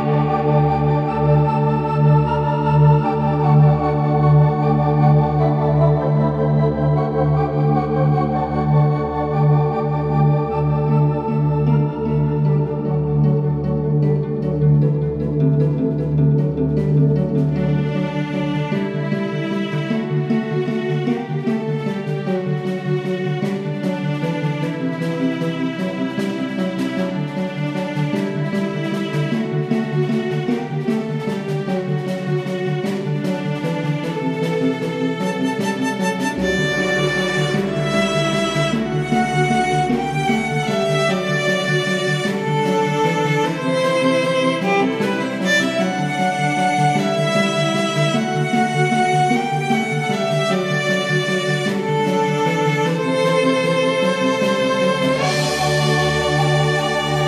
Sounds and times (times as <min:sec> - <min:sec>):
Music: 0:00.0 - 0:57.2.